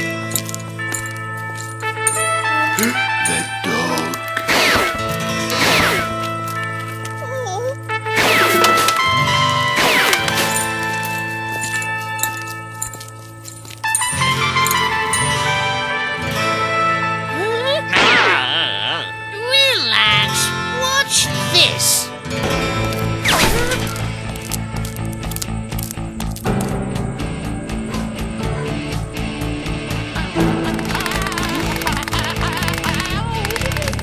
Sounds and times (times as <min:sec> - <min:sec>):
Music: 0:00.0 - 0:34.0.